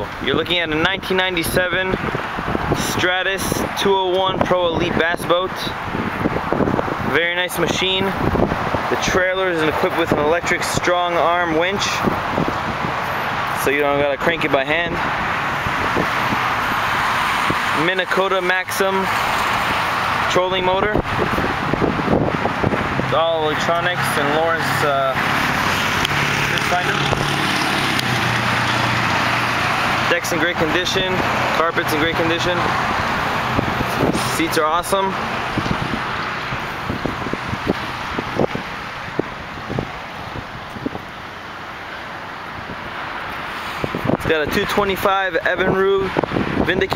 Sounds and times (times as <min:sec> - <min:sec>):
Speech: 0:00.0 - 0:02.0, 0:02.8 - 0:05.8, 0:07.1 - 0:08.2, 0:08.9 - 0:12.1, 0:13.6 - 0:15.0, 0:17.8 - 0:19.2, 0:20.3 - 0:21.0, 0:23.1 - 0:25.2, 0:26.5 - 0:27.2, 0:30.1 - 0:32.7, 0:34.2 - 0:35.2, 0:44.2 - 0:46.9
Vehicle: 0:00.0 - 0:46.9.